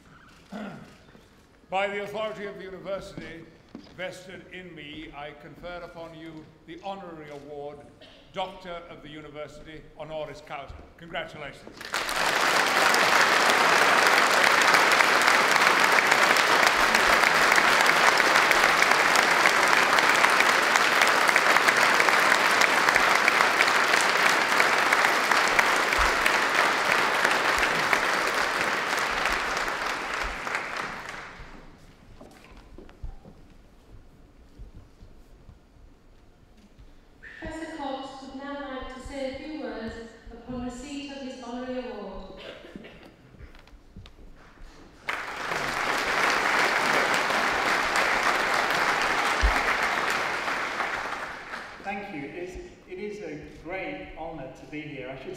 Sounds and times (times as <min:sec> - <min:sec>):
Narration, monologue: 0:00.2 - 0:11.8, 0:36.8 - 0:43.2, 0:51.8 - 0:55.3
Male speech, man speaking: 0:01.7 - 0:11.7, 0:51.9 - 0:55.3.